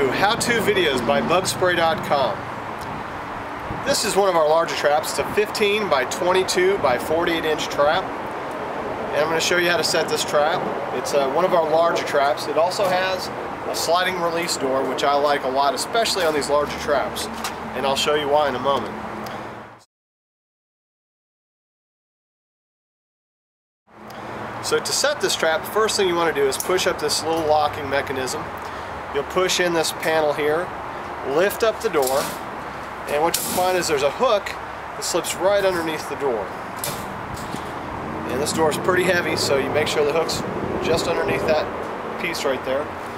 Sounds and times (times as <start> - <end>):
Speech: 0.0 - 2.4, 3.9 - 8.1, 9.1 - 18.9, 24.6 - 28.5, 29.1 - 32.4, 33.1 - 36.5, 38.3 - 42.9
Vehicle: 0.0 - 19.9, 23.9 - 43.1.